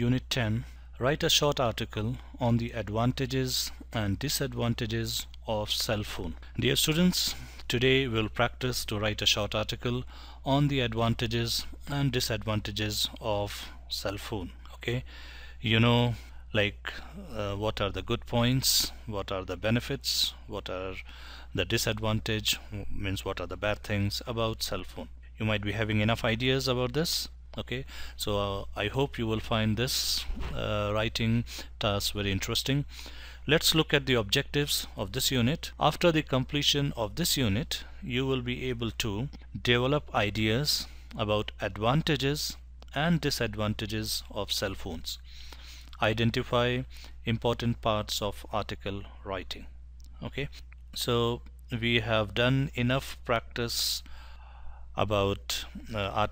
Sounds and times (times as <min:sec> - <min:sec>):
Speech: 0:00.0 - 0:32.9, 0:33.5 - 0:45.3, 0:46.0 - 0:54.1, 0:55.0 - 0:56.3.